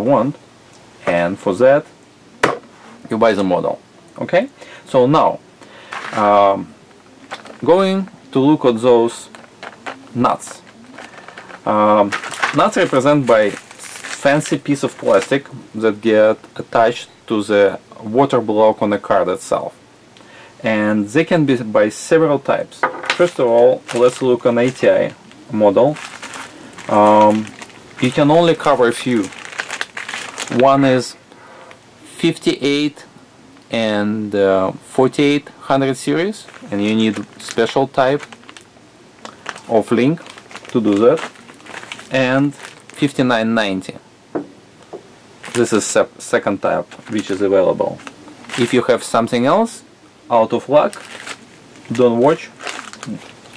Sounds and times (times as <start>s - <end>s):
Speech: 0.0s - 0.4s, 1.0s - 1.9s, 3.0s - 5.4s, 6.1s - 6.7s, 7.6s - 9.4s, 10.1s - 10.7s, 11.6s - 19.8s, 20.6s - 26.0s, 26.9s - 29.3s, 30.5s - 31.2s, 32.1s - 33.1s, 33.7s - 38.3s, 39.7s - 41.3s, 42.1s - 44.0s, 45.6s - 48.0s, 48.6s - 51.0s, 51.9s - 53.2s
Inside, small room: 0.0s - 53.5s.